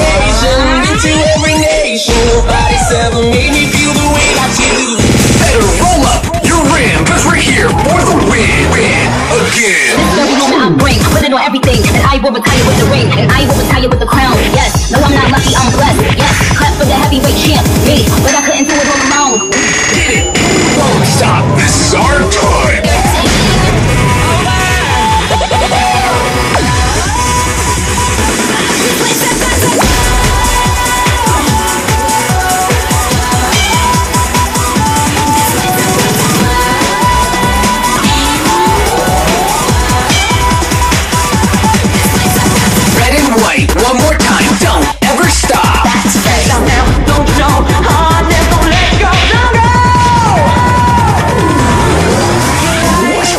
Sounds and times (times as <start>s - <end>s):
Pop music: 0.0s - 53.3s.